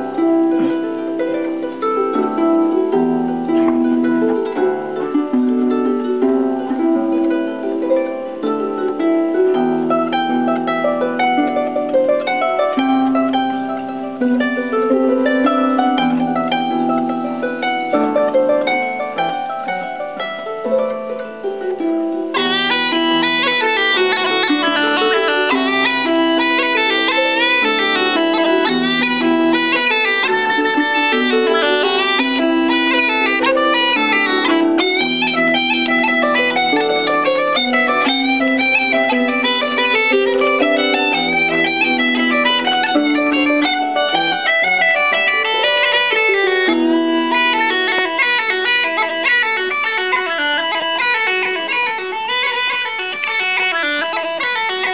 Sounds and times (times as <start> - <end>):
Bowed string instrument: 0.0 - 54.9
Classical music: 0.0 - 54.9
Harp: 0.0 - 54.9
Bagpipes: 22.4 - 54.9.